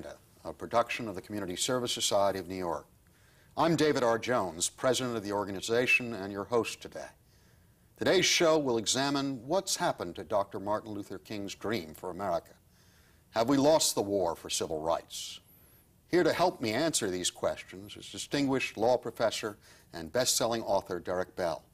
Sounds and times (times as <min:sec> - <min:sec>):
Speech: 0:00.0 - 0:02.9, 0:03.6 - 0:07.2, 0:08.0 - 0:12.6, 0:13.4 - 0:15.4, 0:16.1 - 0:21.7.